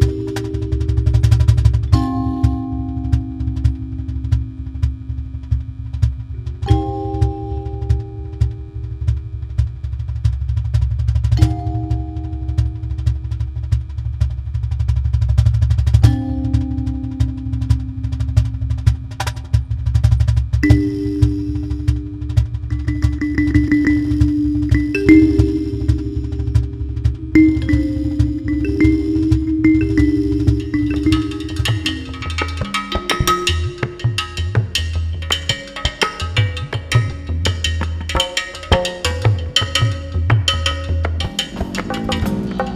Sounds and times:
Wood block: 0.0 - 9.7, 11.2 - 14.3, 15.4 - 42.7.

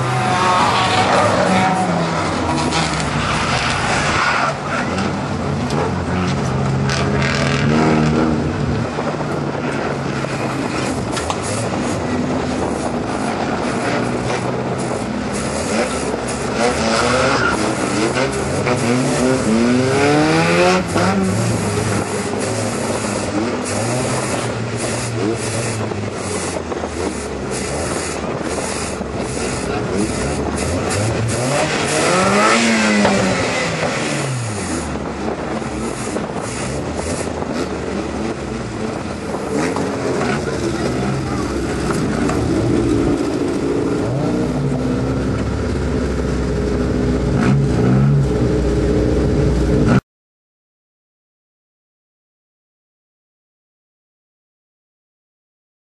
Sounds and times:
Outside, rural or natural: 0.0 - 50.0
Race car, auto racing: 0.0 - 50.0.

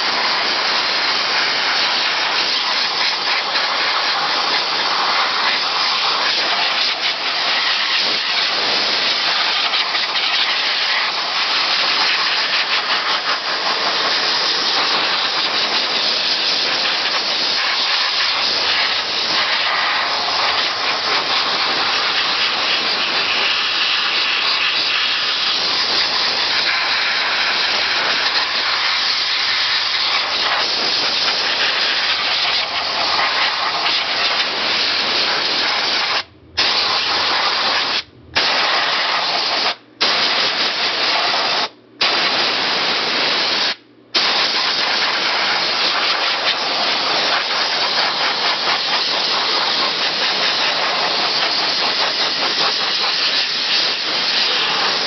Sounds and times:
Steam: 0.0 - 55.0.

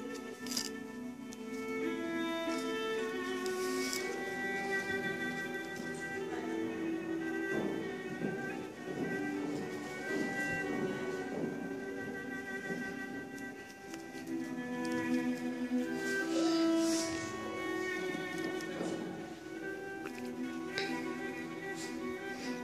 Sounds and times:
Violin, fiddle: 0.0 - 22.6.

